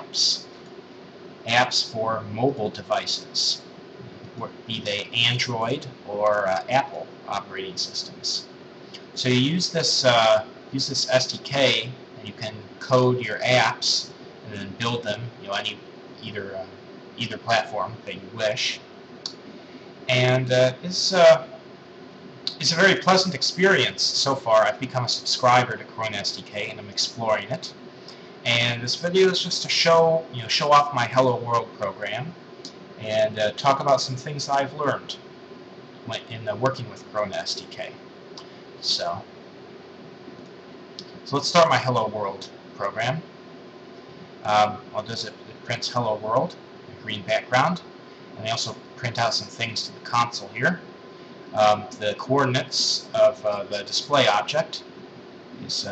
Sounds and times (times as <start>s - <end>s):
Speech: 0.0s - 0.5s, 1.5s - 3.7s, 4.3s - 18.8s, 20.1s - 21.6s, 22.5s - 27.8s, 28.5s - 32.4s, 33.0s - 35.2s, 36.1s - 38.0s, 38.8s - 39.3s, 41.0s - 43.3s, 44.4s - 50.9s, 51.6s - 54.9s, 55.6s - 55.9s.